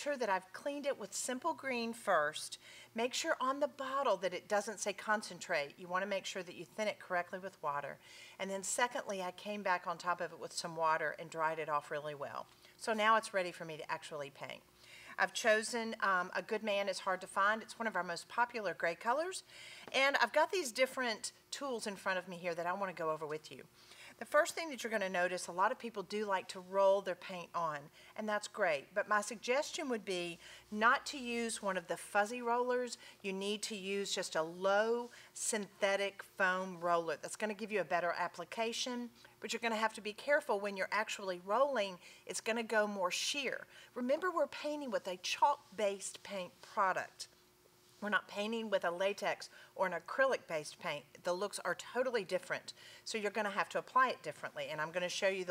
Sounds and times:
Speech: 0.0s - 14.6s, 15.2s - 47.3s, 48.0s - 55.5s.

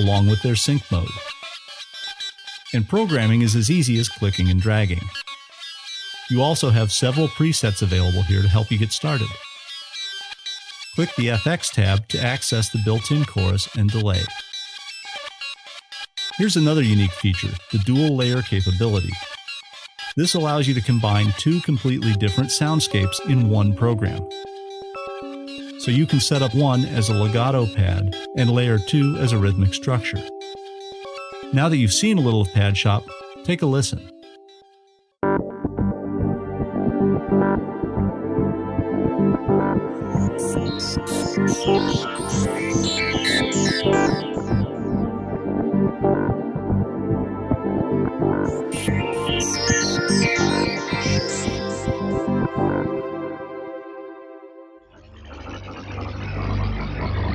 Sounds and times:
Speech: 0.0s - 1.2s, 2.8s - 5.2s, 6.3s - 9.4s, 11.0s - 14.3s, 16.4s - 19.2s, 20.2s - 24.2s, 25.8s - 30.2s, 31.5s - 34.1s, 40.4s - 42.5s
Synthesizer: 0.0s - 57.3s.

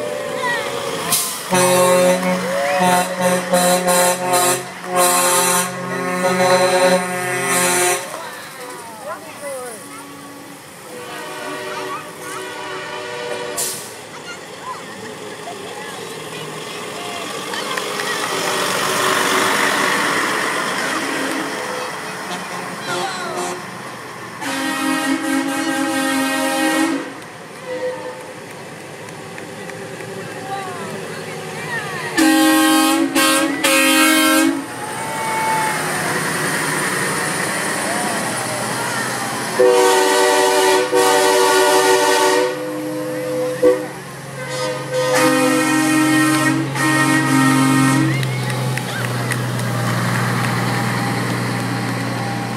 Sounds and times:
Truck: 0.0s - 52.5s.

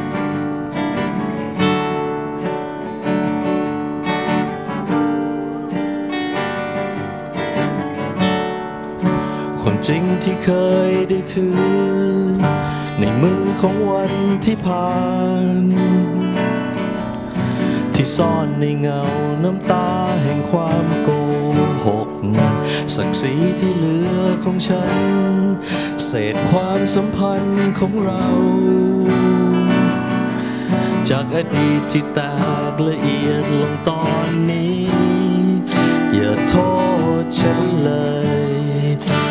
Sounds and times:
Music: 0.0s - 39.3s.

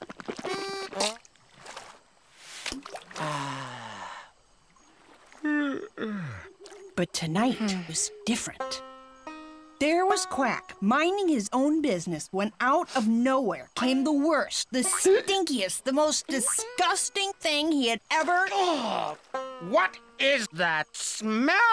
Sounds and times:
Music: 7.6s - 11.5s, 14.8s - 20.6s.

